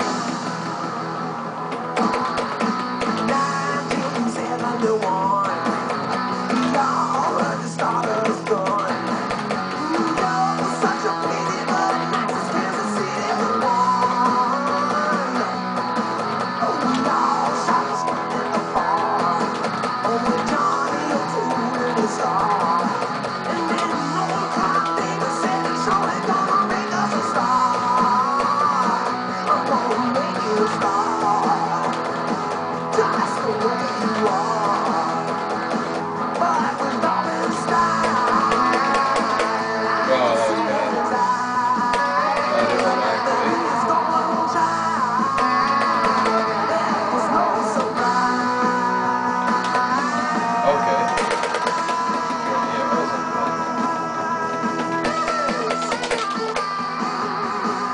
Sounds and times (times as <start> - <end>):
Guitar: 0.0 - 57.9.